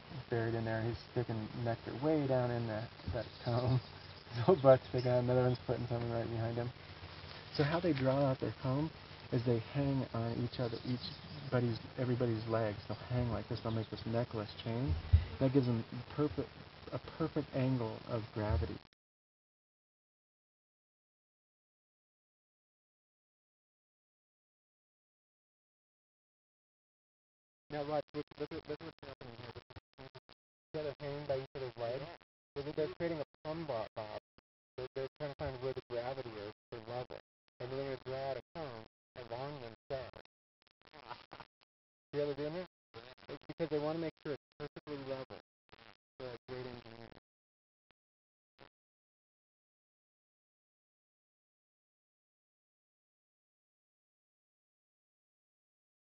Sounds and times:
Speech: 0.0s - 6.8s, 7.5s - 18.9s, 27.7s - 29.7s, 30.8s - 34.2s, 34.8s - 40.2s, 42.2s - 45.4s, 46.2s - 47.1s.

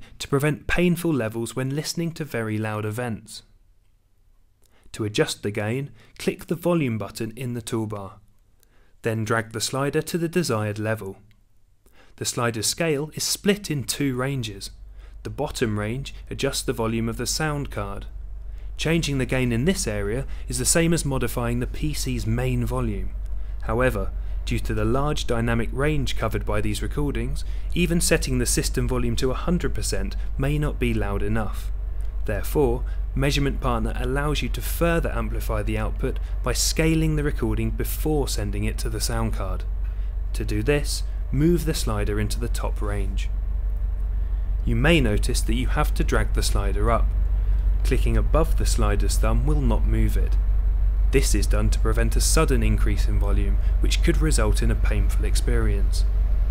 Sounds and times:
Speech: 0.2s - 3.5s, 4.9s - 8.2s, 9.0s - 11.2s, 12.2s - 18.1s, 18.8s - 31.7s, 32.3s - 39.7s, 40.4s - 43.3s, 44.7s - 47.1s, 47.8s - 50.4s, 51.2s - 56.1s.

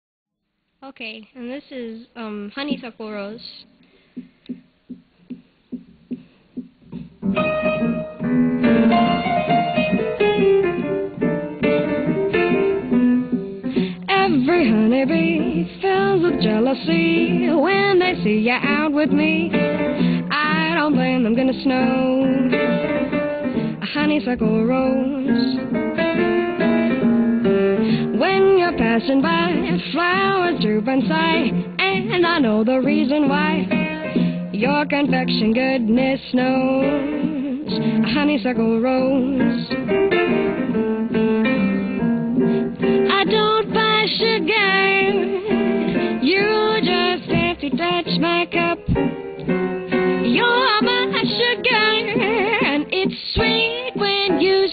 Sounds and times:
Jazz: 4.2s - 54.7s
Piano: 4.2s - 54.7s
Electronic organ: 7.2s - 13.9s.

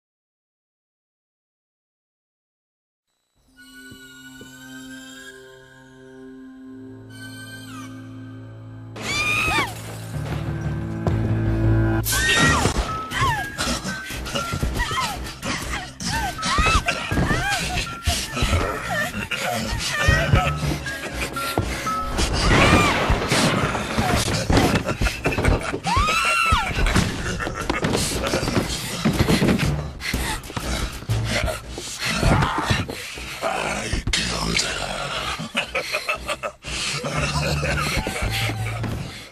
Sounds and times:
Speech: 33.4s - 35.3s.

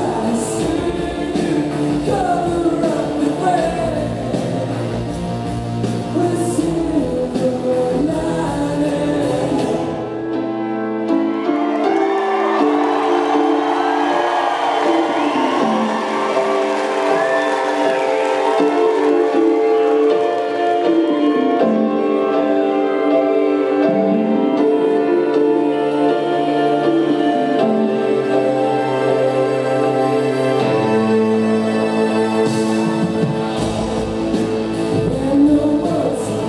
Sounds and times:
Singing: 0.0s - 5.2s, 6.1s - 10.1s, 32.6s - 36.4s.

